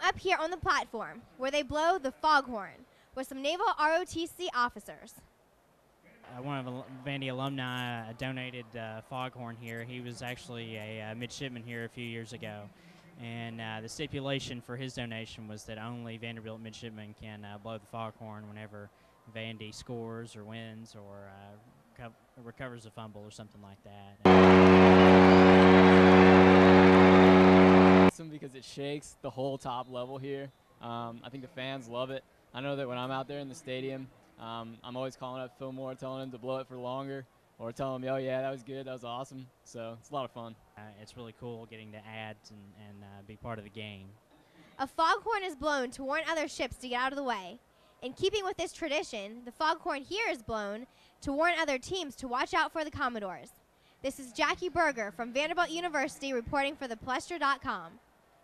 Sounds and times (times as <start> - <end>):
Speech: 0.0 - 5.2, 6.2 - 24.4, 28.1 - 44.2, 44.8 - 58.0.